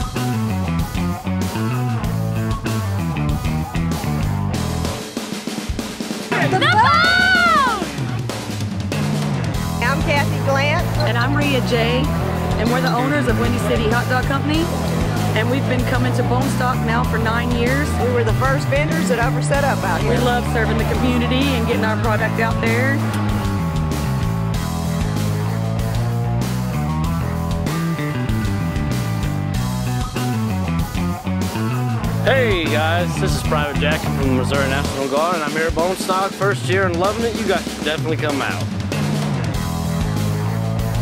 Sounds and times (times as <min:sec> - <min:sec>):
Pop music: 0:00.0 - 0:41.0
Rhythm and blues: 0:00.0 - 0:41.0.